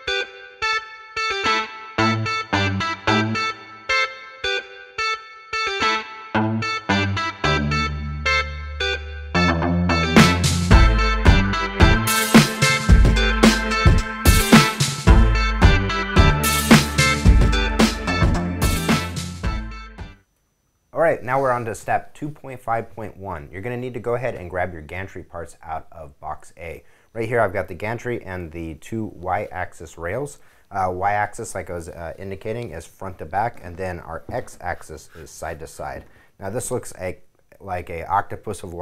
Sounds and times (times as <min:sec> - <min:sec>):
Speech: 0:21.0 - 0:38.8.